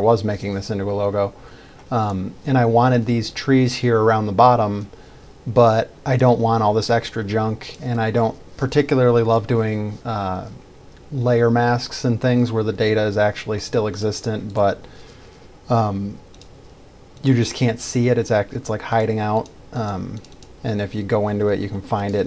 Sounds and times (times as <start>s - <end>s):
Speech: 0.0s - 4.9s, 5.5s - 14.9s, 15.7s - 16.2s, 17.2s - 22.2s.